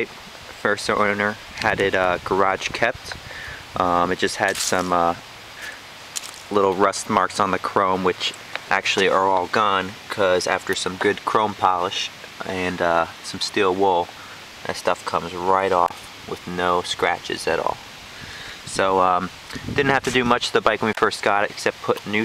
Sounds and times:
Speech: 0.0s - 3.2s, 3.8s - 5.8s, 6.5s - 17.8s, 18.7s - 22.2s.

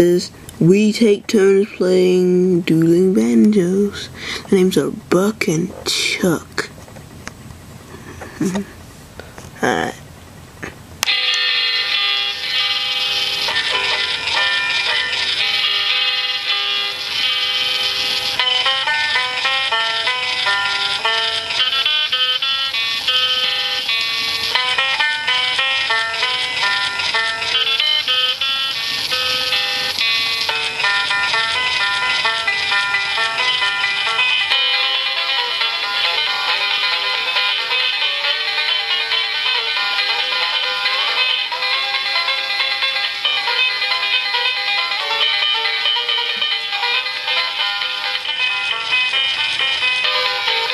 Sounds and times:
Music: 11.0s - 50.7s.

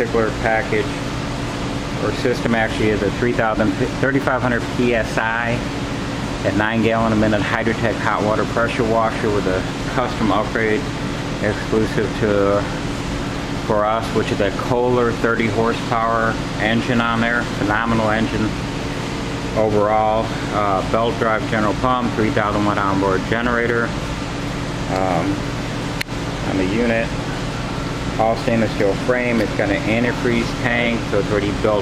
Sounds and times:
Speech: 0.0s - 1.0s, 2.0s - 5.7s, 6.4s - 12.8s, 13.6s - 18.6s, 19.6s - 24.0s, 24.9s - 25.4s, 26.4s - 27.2s, 28.2s - 31.8s.

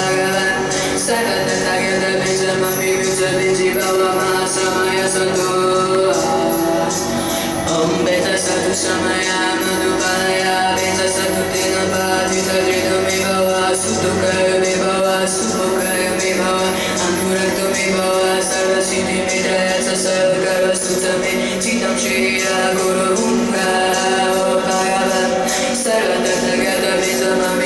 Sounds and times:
Mantra: 0.0s - 27.6s.

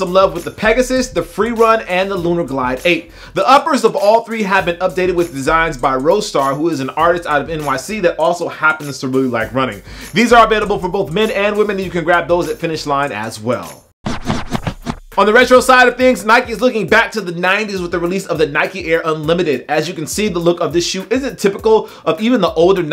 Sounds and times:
Speech: 0.0s - 13.8s, 15.2s - 22.9s
Music: 0.0s - 22.9s.

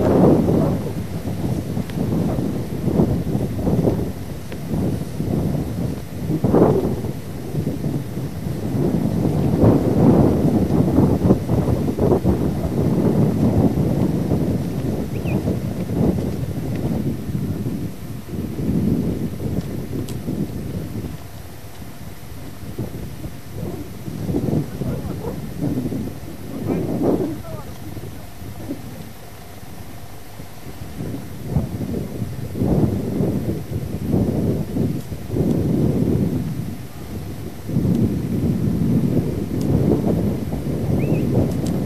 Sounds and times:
Outside, rural or natural: 0.0s - 41.8s
Speech: 24.6s - 25.4s, 26.4s - 29.2s
Domestic animals, pets: 24.7s - 25.5s.

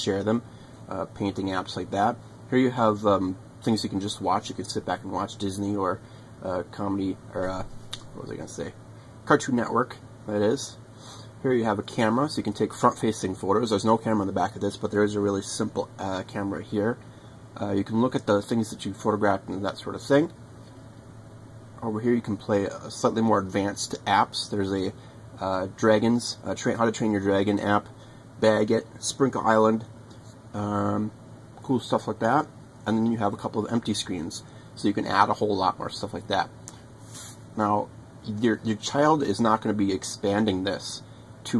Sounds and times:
Speech: 0.0s - 10.8s, 11.4s - 17.0s, 17.6s - 20.4s, 21.8s - 36.6s, 37.6s - 41.5s.

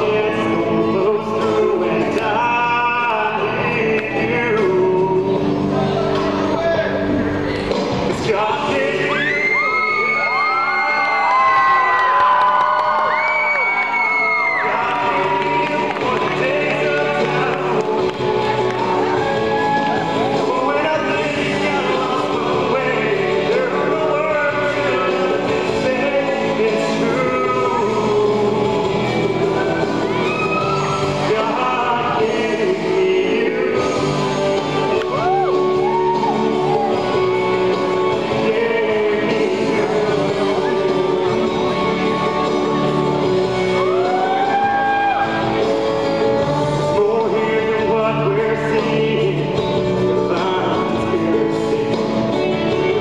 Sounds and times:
Male singing: 0.0s - 7.1s, 8.0s - 11.6s, 14.2s - 53.0s
Music: 0.0s - 53.0s.

